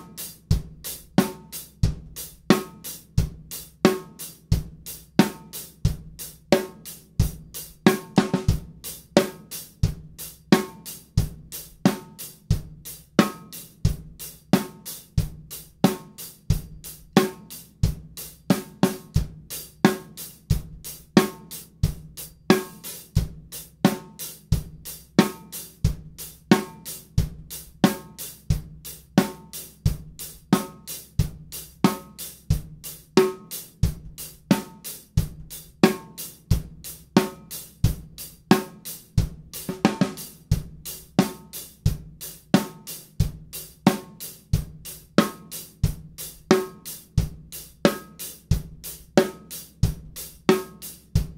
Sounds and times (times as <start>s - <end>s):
Bass drum: 0.0s - 51.3s
Drum kit: 0.0s - 51.3s
Hi-hat: 0.0s - 51.3s.